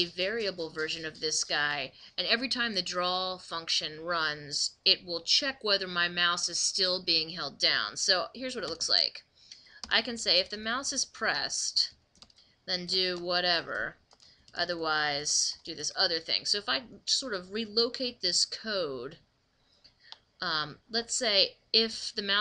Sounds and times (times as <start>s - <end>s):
Speech: 0.0s - 9.2s, 9.9s - 11.9s, 12.7s - 14.0s, 14.6s - 19.2s, 20.4s - 22.4s.